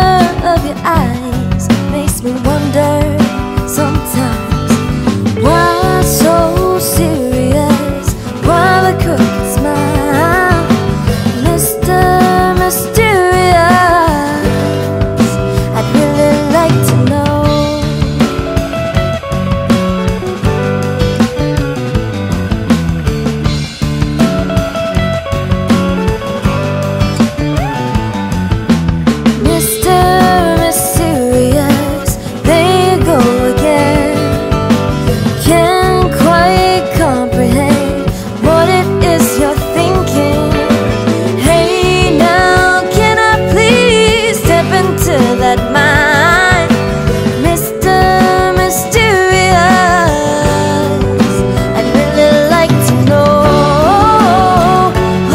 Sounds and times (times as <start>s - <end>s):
Funk: 0.0s - 55.3s.